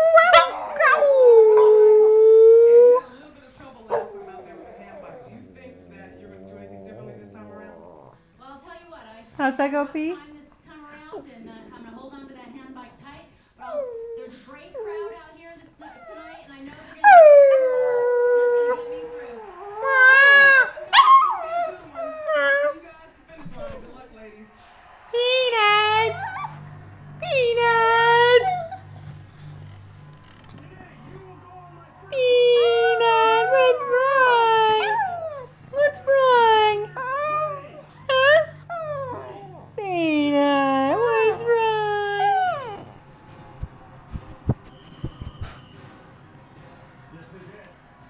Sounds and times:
Speech: 0:03.0 - 0:26.4, 0:27.2 - 0:28.6, 0:30.6 - 0:37.6, 0:39.0 - 0:42.8.

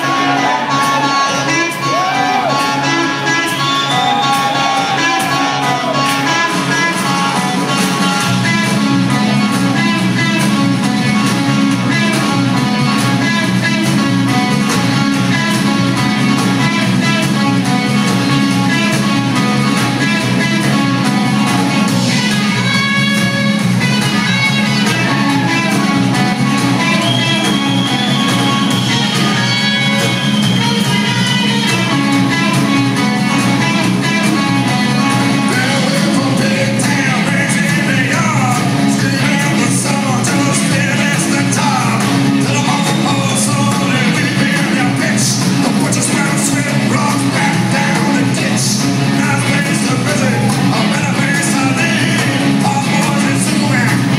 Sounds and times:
Blues: 0:00.0 - 0:54.1.

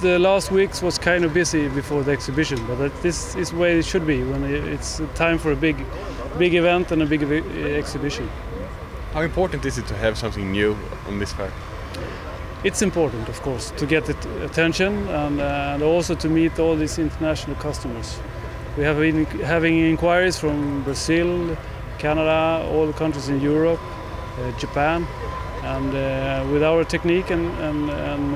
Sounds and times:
Speech: 0:00.0 - 0:08.3, 0:09.2 - 0:11.5, 0:12.7 - 0:18.2, 0:18.8 - 0:23.8, 0:24.4 - 0:28.3.

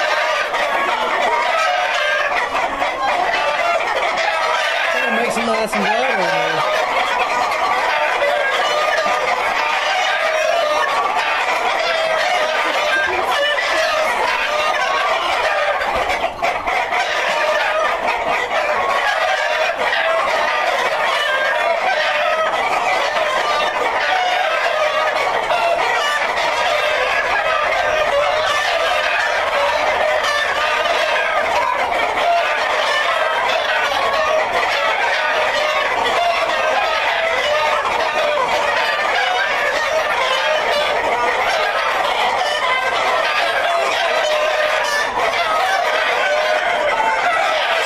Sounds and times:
Cluck: 0:00.0 - 0:47.8.

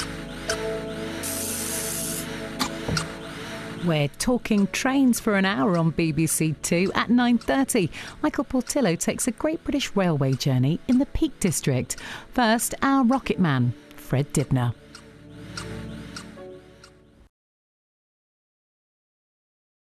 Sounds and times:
Speech: 0:03.8 - 0:14.8.

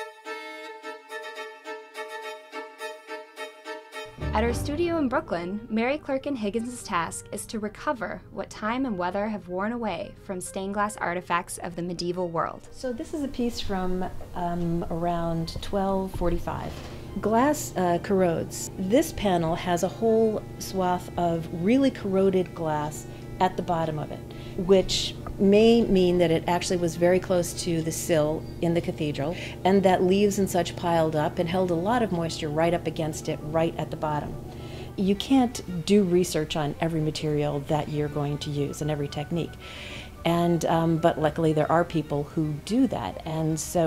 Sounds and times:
Music: 0:00.0 - 0:43.8
Speech: 0:04.2 - 0:34.4, 0:35.0 - 0:39.6, 0:40.3 - 0:43.8.

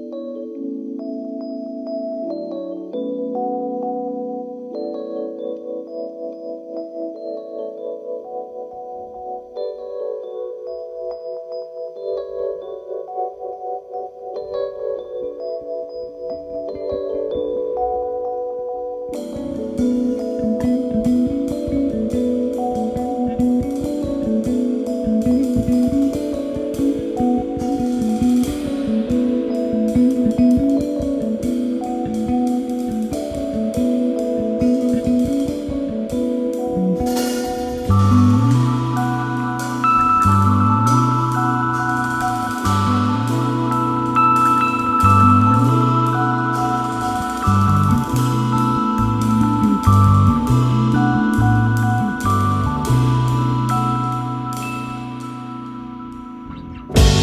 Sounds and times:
Music: 0:00.0 - 0:57.2.

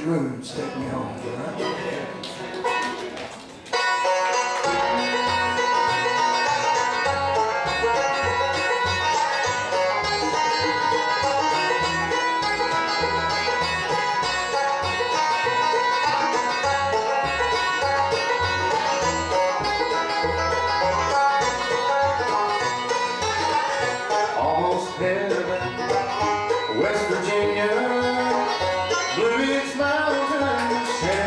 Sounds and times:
Music: 0:01.3 - 0:31.2.

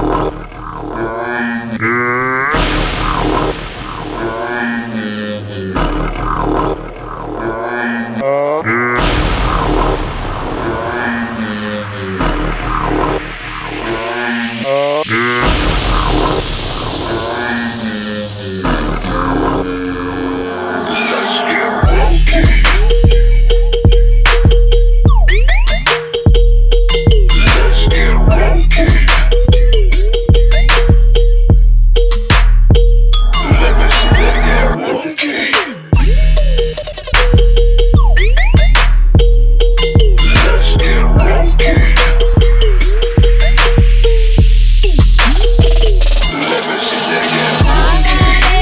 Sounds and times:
Music: 0:00.0 - 0:48.6.

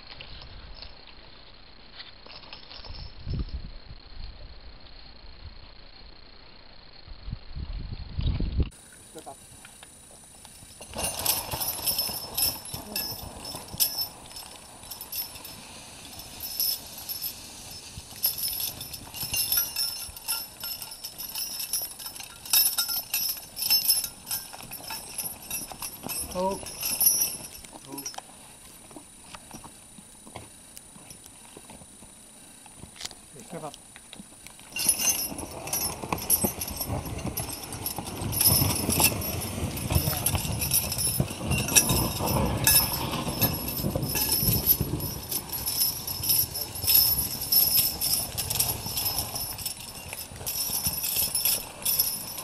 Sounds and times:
Clip-clop: 0:00.0 - 0:06.1, 0:07.8 - 0:52.4
Speech: 0:09.1 - 0:09.4, 0:26.3 - 0:26.7, 0:27.8 - 0:28.1, 0:33.3 - 0:33.8.

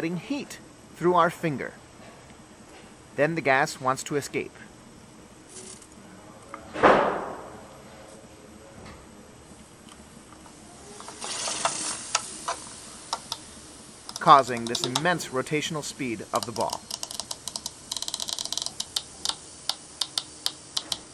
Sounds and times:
Speech: 0:00.0 - 0:01.8, 0:03.2 - 0:04.7, 0:14.2 - 0:16.8.

